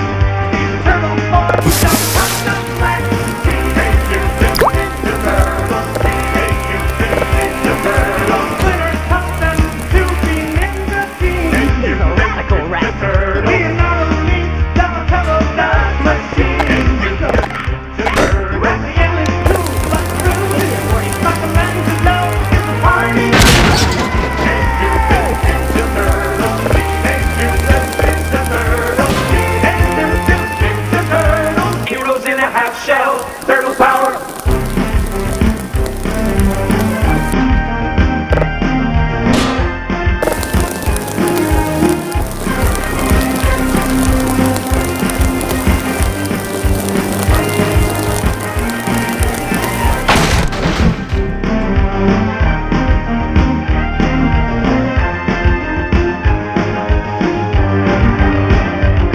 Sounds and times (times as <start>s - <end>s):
Music: 0.0s - 59.1s.